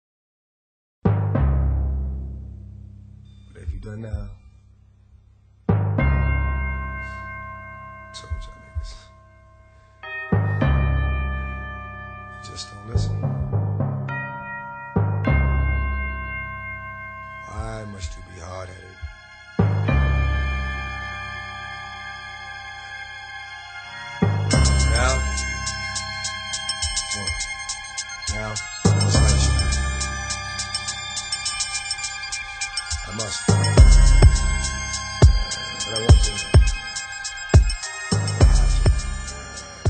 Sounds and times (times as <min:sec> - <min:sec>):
Music: 0:01.0 - 0:39.8.